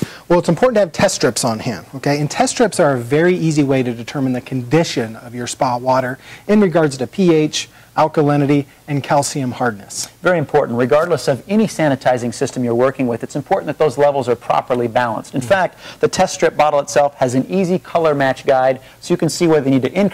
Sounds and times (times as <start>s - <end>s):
Speech: 0.3s - 20.1s.